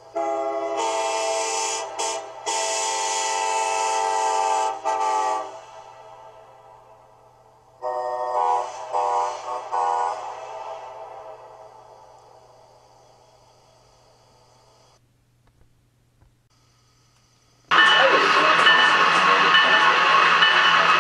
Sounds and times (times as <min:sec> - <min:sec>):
Train horn: 0:00.1 - 0:06.7, 0:07.8 - 0:11.7.